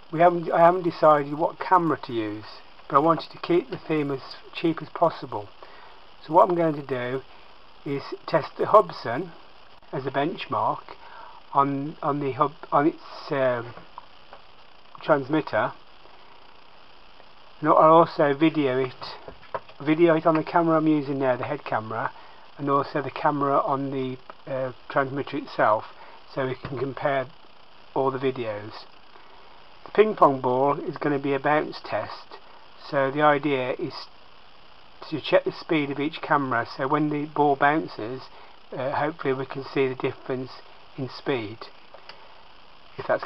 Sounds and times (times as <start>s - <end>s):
Speech: 0.1s - 5.5s, 6.2s - 7.2s, 7.9s - 13.8s, 15.0s - 15.8s, 17.6s - 27.3s, 28.0s - 28.9s, 29.9s - 34.1s, 35.0s - 41.8s, 43.0s - 43.2s.